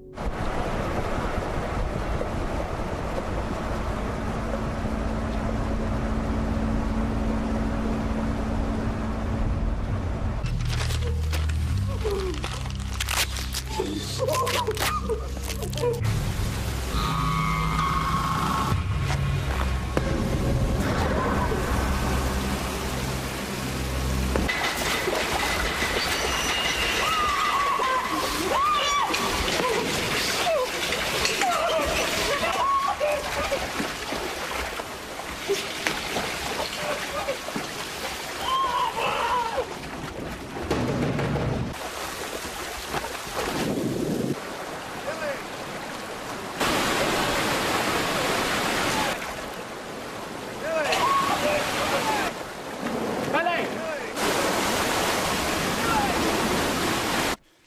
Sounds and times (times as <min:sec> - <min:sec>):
Waterfall: 0:00.0 - 0:06.7, 0:09.8 - 0:57.4
Outside, rural or natural: 0:00.0 - 0:57.6
Rain: 0:00.0 - 0:57.6
Speech: 0:53.3 - 0:54.2.